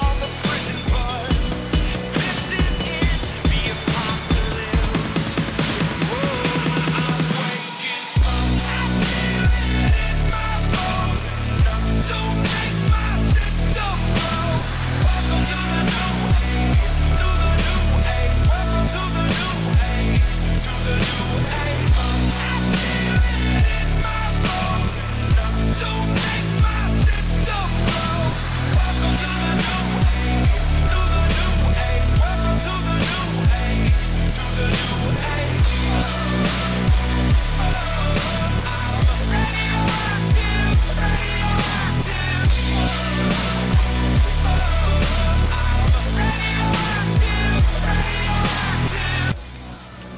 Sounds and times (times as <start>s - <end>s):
Music: 0.0s - 50.1s.